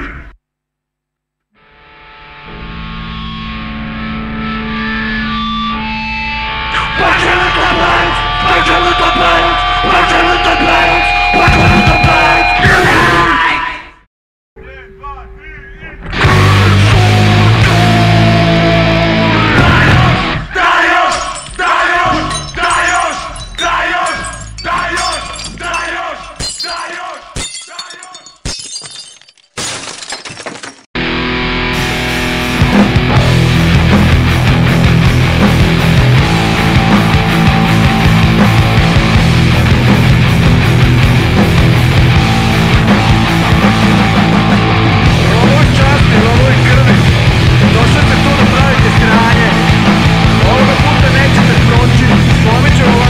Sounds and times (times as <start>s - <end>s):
Heavy metal: 2.6s - 13.4s, 16.1s - 25.8s, 31.0s - 53.0s
Shatter: 21.1s - 30.9s.